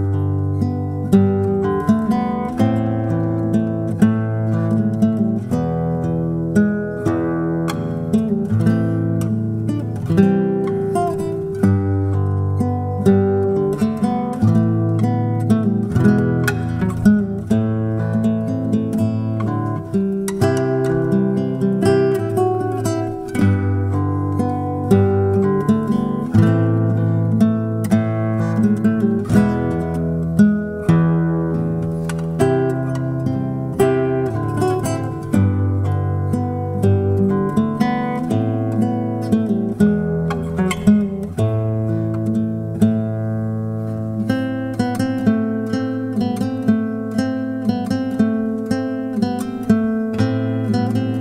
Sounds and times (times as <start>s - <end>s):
Guitar: 0.0s - 51.2s.